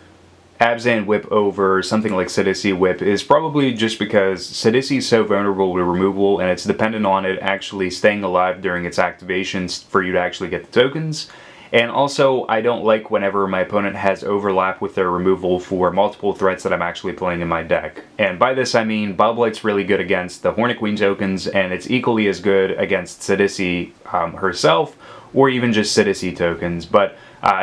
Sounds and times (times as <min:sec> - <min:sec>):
Speech: 0:00.6 - 0:27.6.